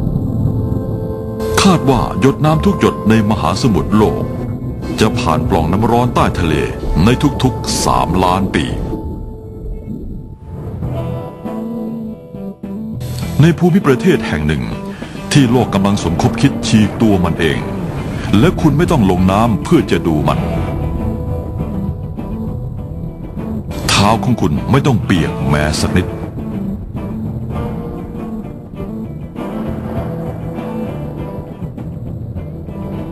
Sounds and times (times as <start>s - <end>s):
Music: 0.0s - 33.1s
Speech: 1.6s - 4.3s, 4.9s - 9.0s, 13.4s - 17.7s, 18.3s - 20.5s, 23.8s - 26.2s.